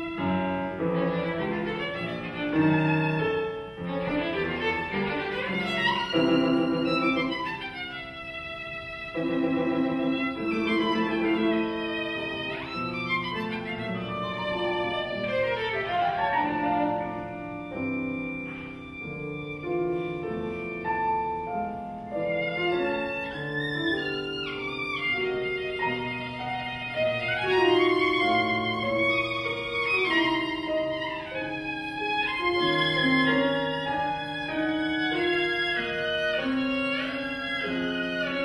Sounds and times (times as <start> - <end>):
Violin, fiddle: 0.0 - 38.4.